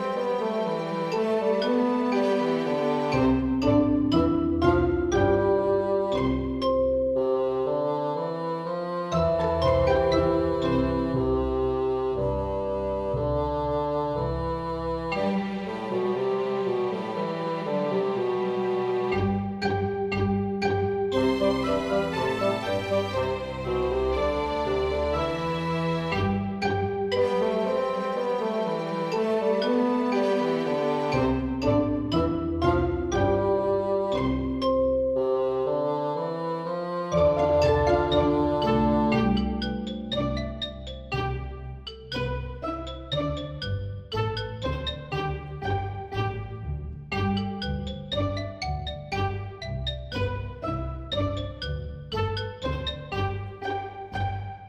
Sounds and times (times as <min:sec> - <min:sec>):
Music: 0:00.0 - 0:54.6.